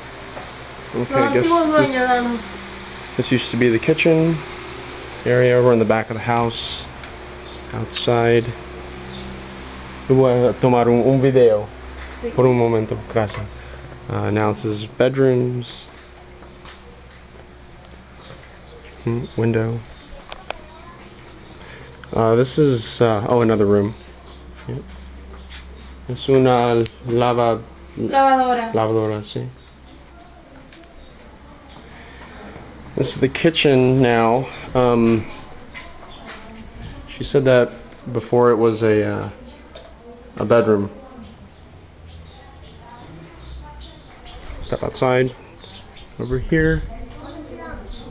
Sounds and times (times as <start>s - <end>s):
Speech: 1.0s - 2.5s, 5.3s - 6.9s, 7.7s - 8.6s, 22.1s - 24.0s, 33.0s - 39.8s, 46.2s - 48.1s.